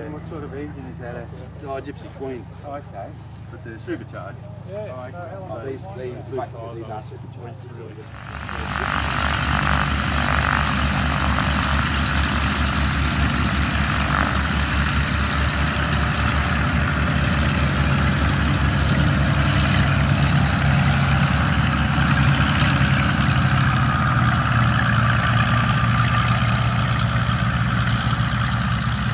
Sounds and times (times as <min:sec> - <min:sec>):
Speech: 0:00.0 - 0:09.0.